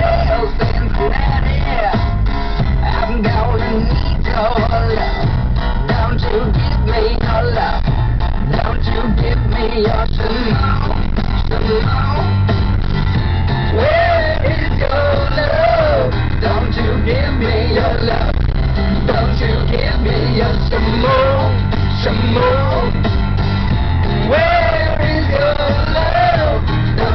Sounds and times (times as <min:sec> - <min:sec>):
Car: 0:00.0 - 0:27.1
Music: 0:00.0 - 0:27.1.